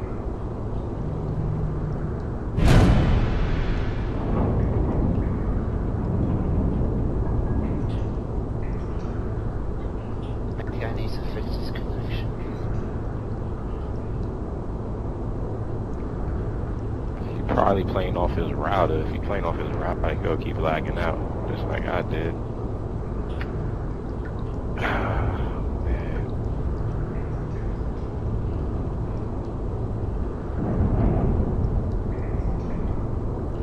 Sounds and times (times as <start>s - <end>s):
Speech: 10.6s - 12.3s, 17.2s - 22.4s, 24.8s - 26.3s.